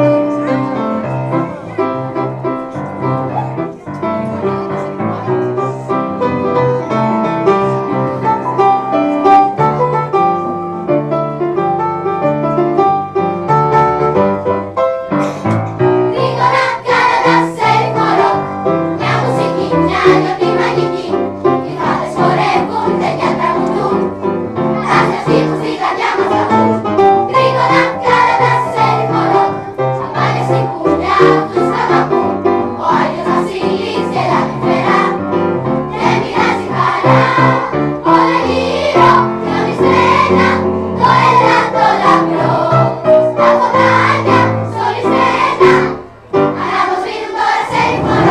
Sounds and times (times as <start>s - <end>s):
Music: 0.0s - 48.3s.